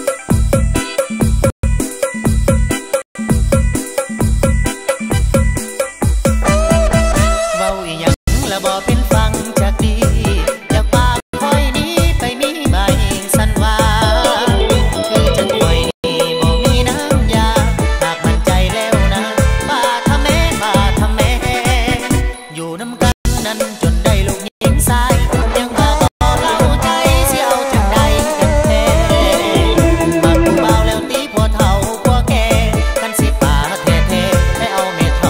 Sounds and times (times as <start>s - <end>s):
Exciting music: 14.1s - 15.9s, 26.2s - 32.3s.